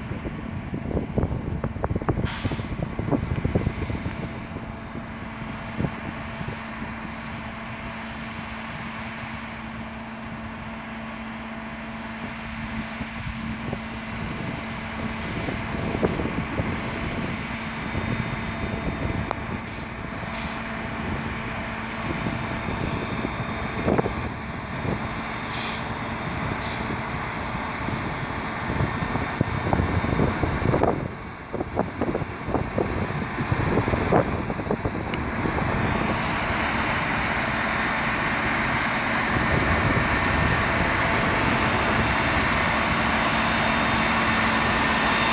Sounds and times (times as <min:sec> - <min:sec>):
Truck: 0:00.0 - 0:45.3.